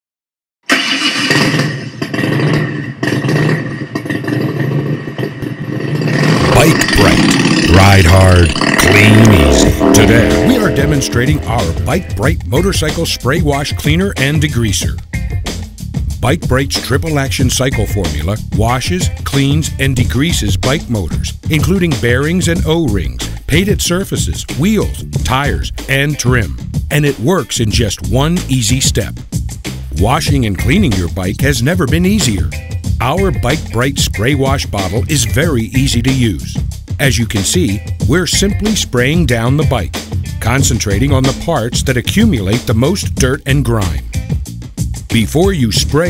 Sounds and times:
Medium engine (mid frequency): 0.7s - 11.8s
Motorcycle: 0.7s - 13.1s, 38.6s - 42.7s
Speech: 6.4s - 15.0s, 16.2s - 29.2s, 29.9s - 44.0s, 45.1s - 46.0s.

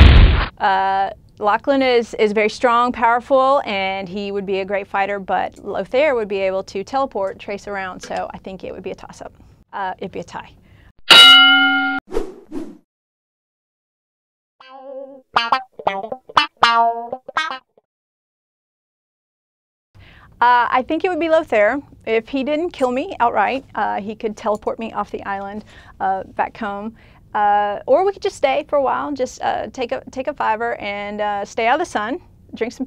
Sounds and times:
Female speech, woman speaking: 0.6s - 10.6s, 20.4s - 32.8s
Music: 14.6s - 17.7s.

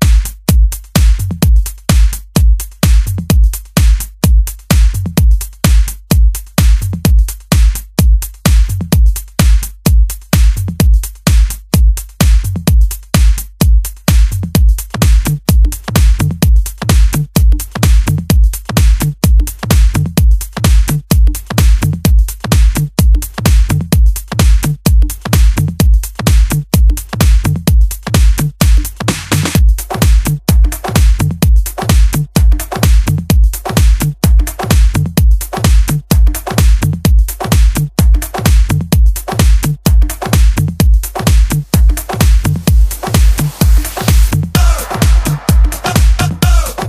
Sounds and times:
Music: 0.0s - 46.8s.

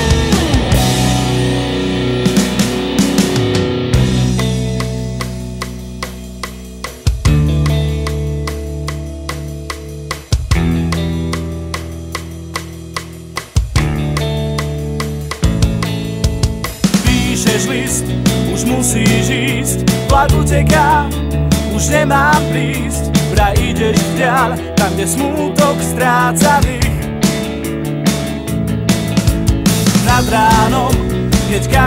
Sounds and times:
Music: 0.0s - 31.8s.

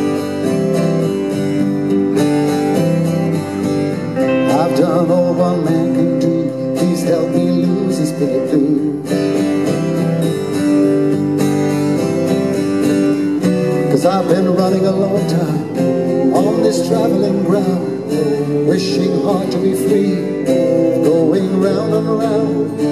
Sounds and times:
Music: 0.0s - 22.9s.

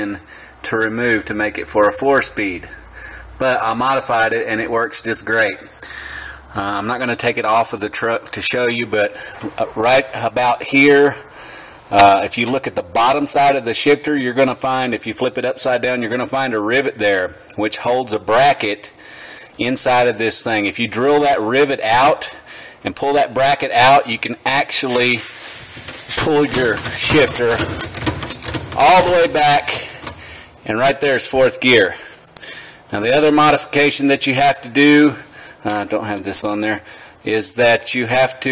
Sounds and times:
Speech: 0.0s - 2.8s, 3.4s - 5.7s, 6.5s - 11.2s, 11.9s - 18.9s, 19.6s - 25.3s, 26.1s - 27.8s, 28.8s - 30.0s, 30.6s - 32.0s, 32.9s - 38.5s.

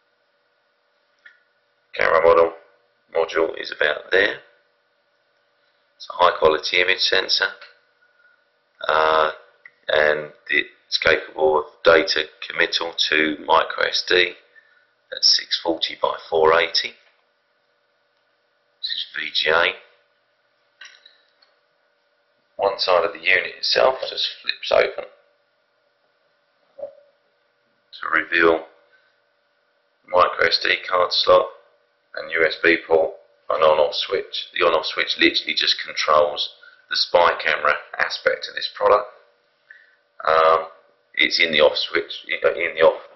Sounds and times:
Speech: 2.0s - 4.6s, 6.0s - 7.7s, 8.8s - 14.4s, 15.1s - 17.0s, 18.8s - 19.9s, 22.6s - 25.1s, 26.8s - 27.0s, 28.0s - 28.8s, 30.1s - 39.2s, 40.2s - 43.1s.

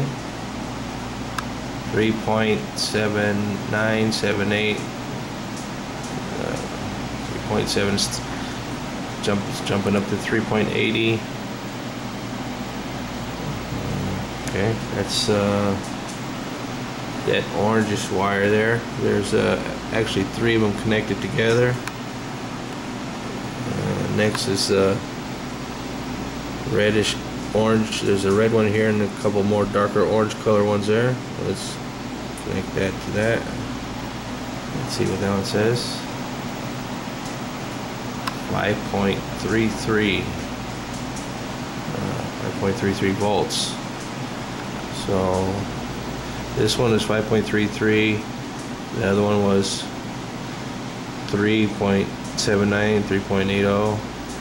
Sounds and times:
Inside, small room: 0.0s - 54.4s
Speech: 1.9s - 4.9s, 6.2s - 8.3s, 9.2s - 11.3s, 13.4s - 15.9s, 17.2s - 21.9s, 23.6s - 25.1s, 26.6s - 31.8s, 32.4s - 33.6s, 34.7s - 36.1s, 38.3s - 40.4s, 41.9s - 43.8s, 44.9s - 45.7s, 46.5s - 48.3s, 48.9s - 50.0s, 51.2s - 54.1s.

